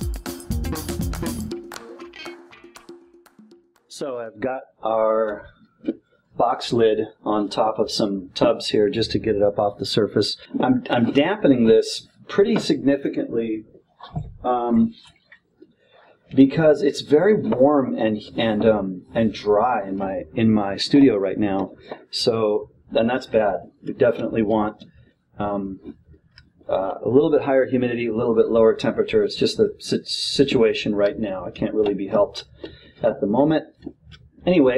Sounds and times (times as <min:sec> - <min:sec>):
Speech: 0:03.9 - 0:05.5, 0:06.4 - 0:15.0, 0:16.4 - 0:26.0, 0:26.7 - 0:34.7.